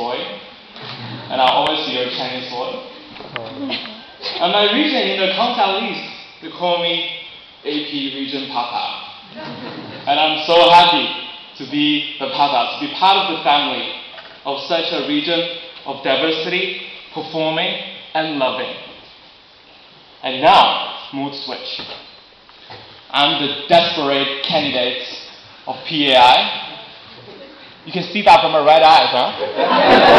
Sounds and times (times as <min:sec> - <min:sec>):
Male speech, man speaking: 0:00.0 - 0:00.4, 0:01.3 - 0:03.6, 0:04.4 - 0:09.1, 0:10.1 - 0:18.9, 0:20.2 - 0:21.9, 0:23.1 - 0:26.8, 0:27.9 - 0:29.4.